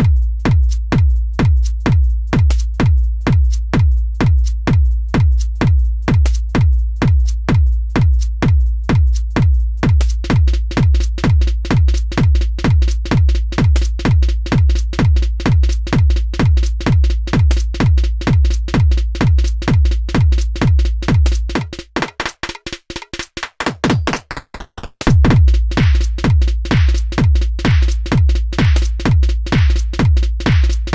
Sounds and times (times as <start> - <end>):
Bass drum: 0.0 - 30.9
Drum machine: 0.0 - 30.9.